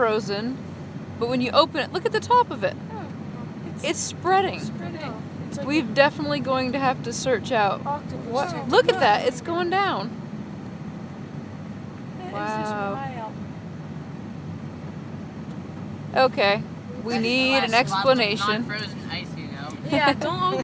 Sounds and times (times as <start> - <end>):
Speech: 3.8 - 10.1, 12.2 - 13.3, 16.2 - 20.6.